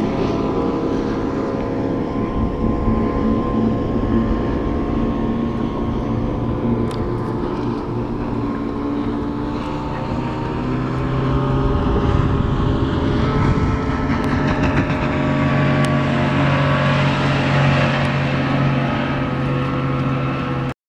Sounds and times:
Motorboat, speedboat: 0:00.0 - 0:20.8.

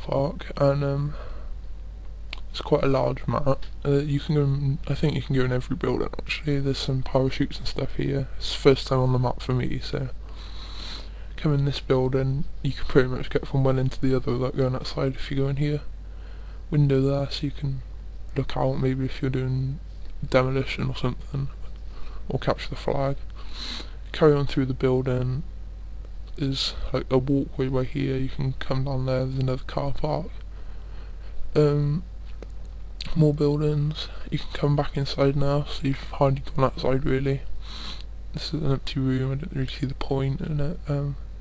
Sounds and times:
Speech: 0:00.0 - 0:01.4, 0:02.4 - 0:10.2, 0:11.4 - 0:15.9, 0:16.7 - 0:25.5, 0:26.3 - 0:30.4, 0:31.5 - 0:32.1, 0:33.0 - 0:37.5, 0:38.4 - 0:41.2.

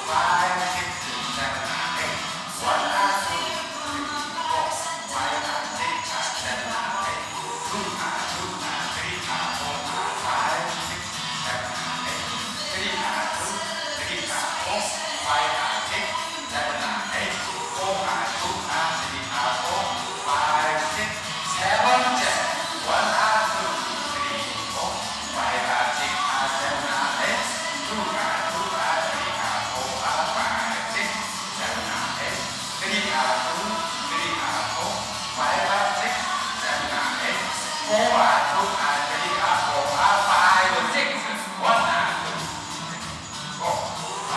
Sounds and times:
Music: 0:00.0 - 0:44.3
Speech: 0:00.0 - 0:44.3.

